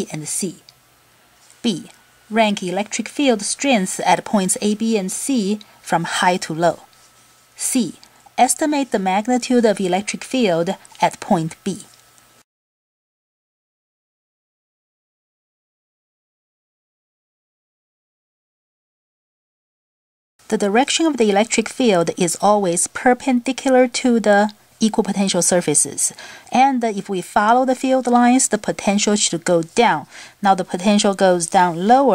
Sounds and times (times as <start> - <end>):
Speech: 0.0 - 0.7, 1.6 - 6.9, 7.6 - 12.0, 20.5 - 32.1.